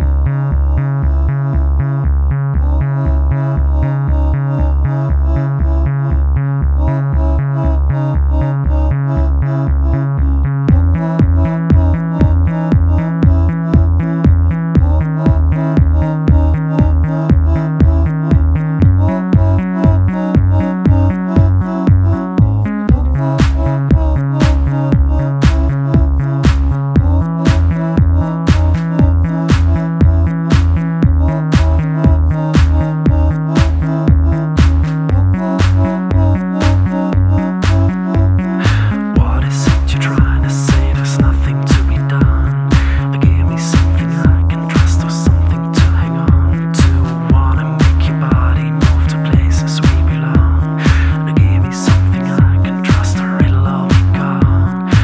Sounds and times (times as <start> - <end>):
Music: 0.0 - 55.0.